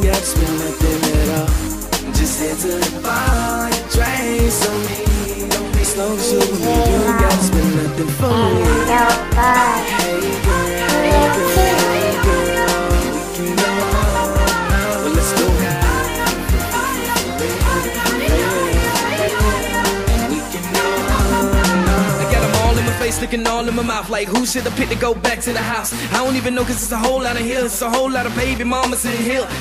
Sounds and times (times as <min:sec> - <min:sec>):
Hip hop music: 0:00.0 - 0:29.6
Rapping: 0:00.0 - 0:29.6.